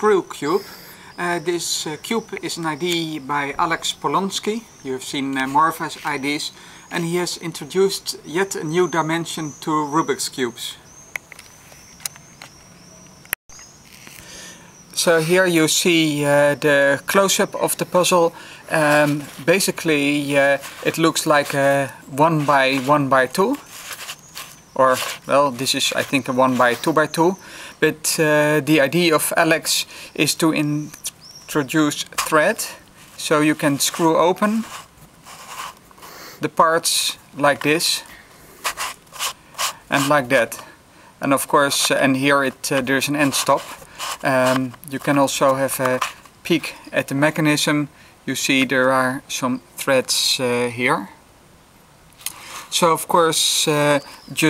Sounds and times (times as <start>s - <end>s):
Speech: 0.0s - 10.9s, 15.0s - 23.6s, 24.8s - 34.7s, 36.4s - 38.1s, 39.9s - 51.2s, 52.7s - 54.5s
Outside, urban or manmade: 0.0s - 54.5s.